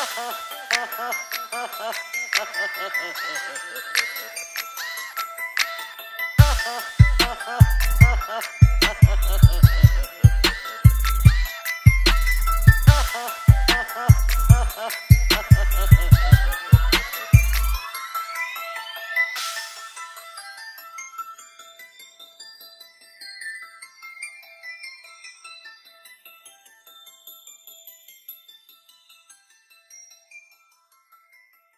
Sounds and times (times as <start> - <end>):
Music: 0.0 - 31.7.